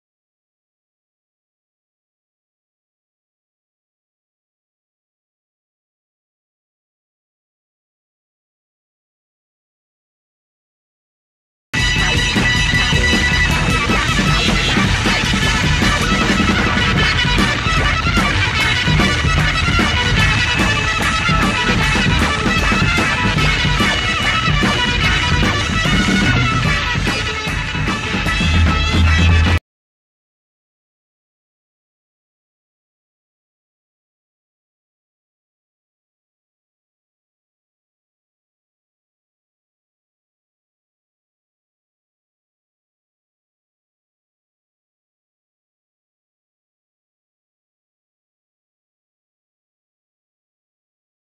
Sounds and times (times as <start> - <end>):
Funk: 11.8 - 29.6
Psychedelic rock: 11.8 - 29.6
Ska: 11.8 - 29.6
Soul music: 11.8 - 29.6.